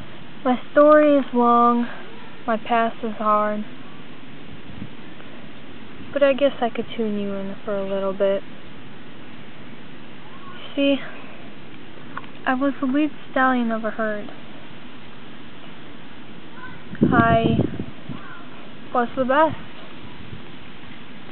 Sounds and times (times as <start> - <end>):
Speech: 6.2 - 8.4, 12.5 - 14.3, 17.0 - 17.6, 19.0 - 19.6.